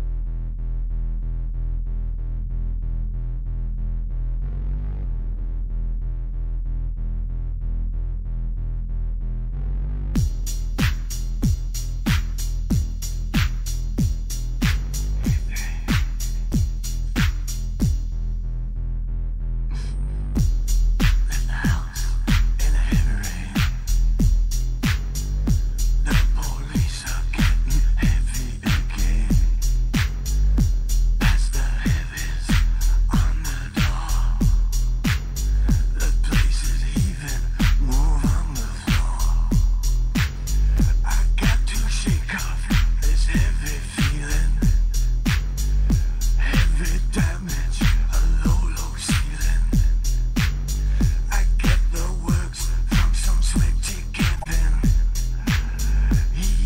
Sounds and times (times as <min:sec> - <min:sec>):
Music: 0:00.0 - 0:56.6.